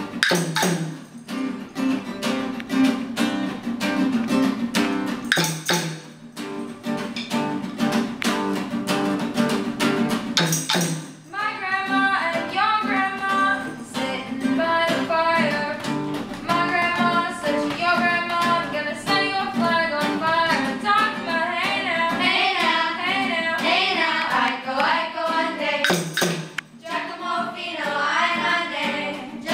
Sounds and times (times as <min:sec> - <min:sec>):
Singing: 0:11.4 - 0:26.0, 0:26.8 - 0:29.5.